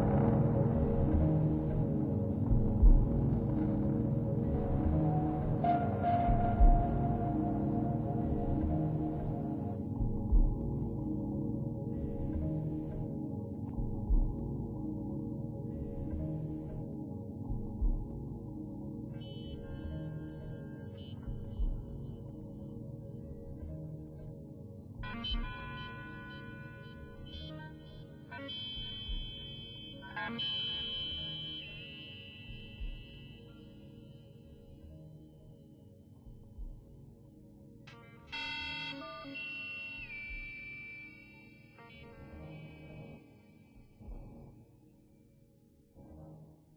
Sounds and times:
Electronic music: 0.0 - 13.2, 25.0 - 35.1, 37.9 - 43.3.

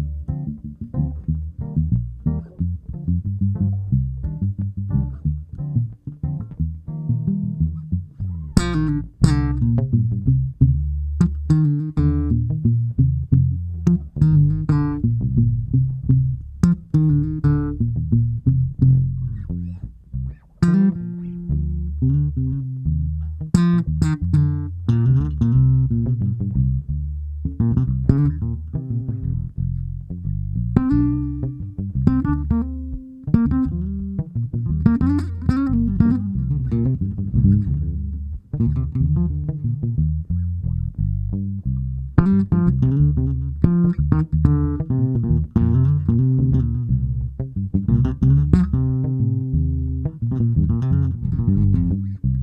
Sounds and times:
Plucked string instrument: 0.0 - 52.4.

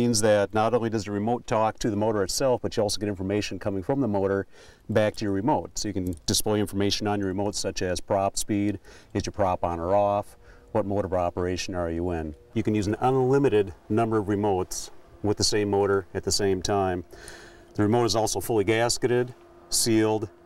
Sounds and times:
Speech: 0.0 - 17.1, 17.8 - 20.3.

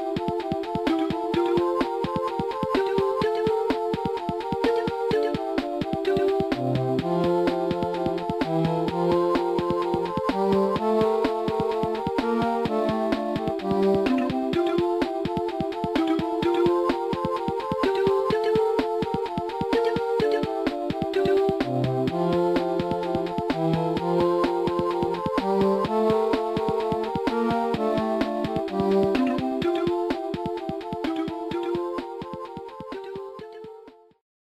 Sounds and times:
Music: 0.0 - 34.2.

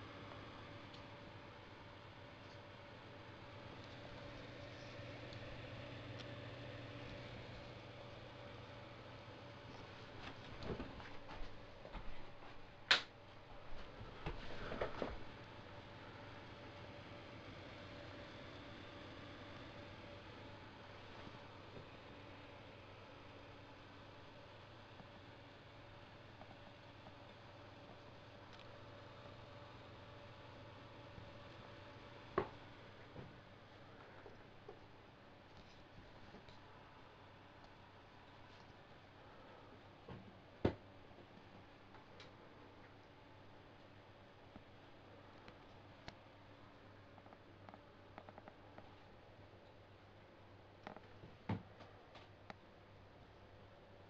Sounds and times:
Inside, small room: 0.0 - 54.1.

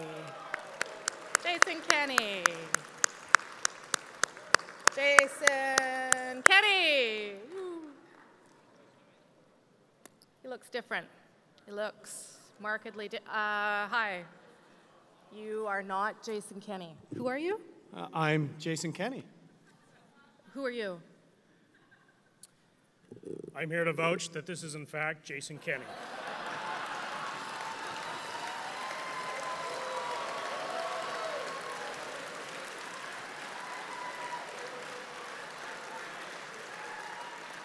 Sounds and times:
Narration, monologue: 15.4 - 19.7, 22.4 - 25.9
Male speech, man speaking: 17.9 - 19.3, 23.1 - 25.9.

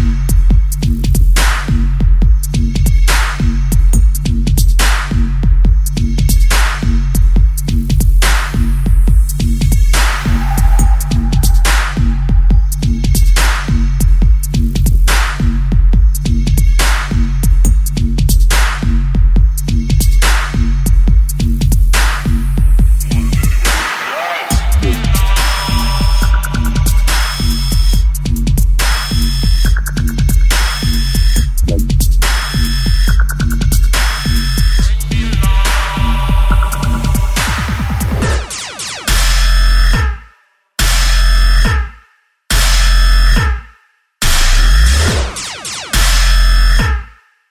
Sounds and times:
Dubstep: 0.0 - 40.2, 44.2 - 47.2.

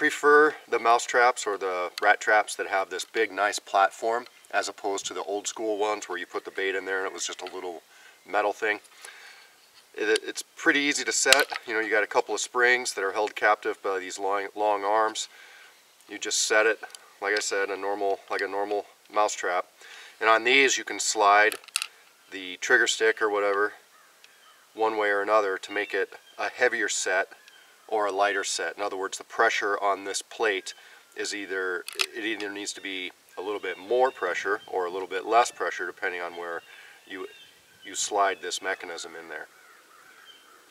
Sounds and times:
Speech: 0.0 - 8.8, 10.0 - 15.3, 16.1 - 21.6, 22.3 - 23.8, 24.8 - 37.3, 37.9 - 39.5.

